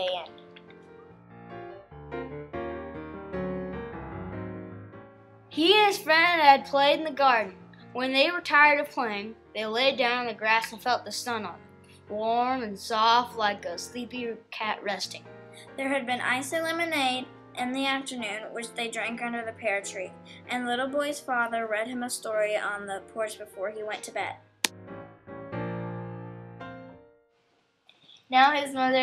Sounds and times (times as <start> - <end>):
Music: 0.0 - 29.0
Speech: 5.6 - 15.2, 15.8 - 24.4, 28.3 - 29.0.